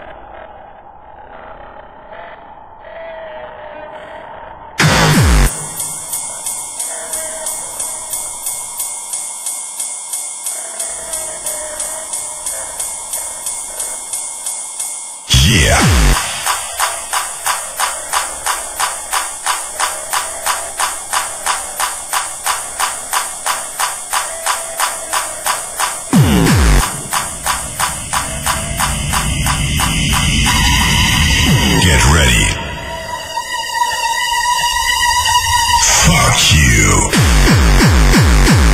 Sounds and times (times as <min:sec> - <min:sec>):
Cacophony: 0:00.0 - 0:38.7
Music: 0:03.2 - 0:38.7
Speech: 0:15.3 - 0:16.4, 0:31.5 - 0:32.7, 0:35.8 - 0:37.2.